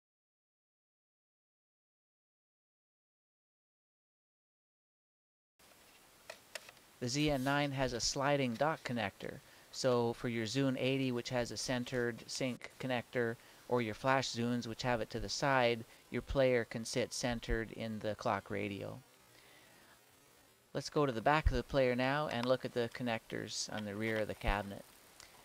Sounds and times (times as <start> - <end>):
Speech: 7.0 - 19.0, 20.7 - 24.9.